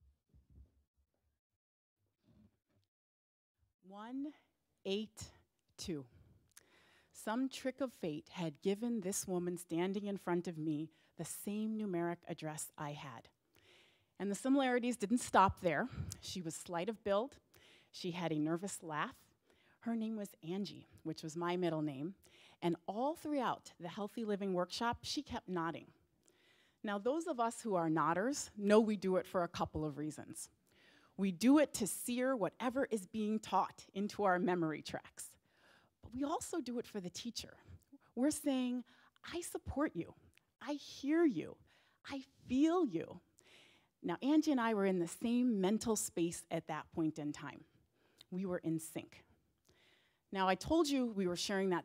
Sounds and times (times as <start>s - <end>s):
Speech: 3.9s - 6.1s, 7.2s - 13.3s, 14.2s - 17.4s, 18.0s - 19.2s, 19.8s - 25.9s, 26.9s - 30.5s, 31.2s - 35.4s, 36.1s - 37.6s, 38.2s - 43.2s, 44.1s - 47.7s, 48.4s - 49.3s, 50.4s - 51.8s.